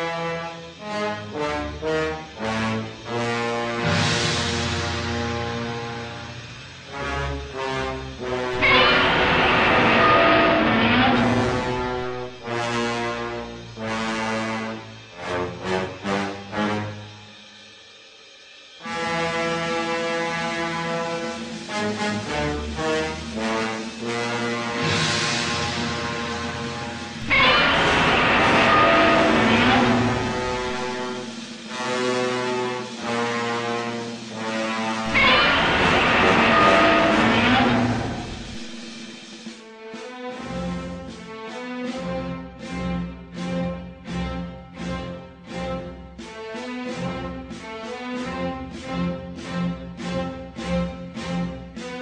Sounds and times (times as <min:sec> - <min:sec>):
Music: 0:00.0 - 0:52.0.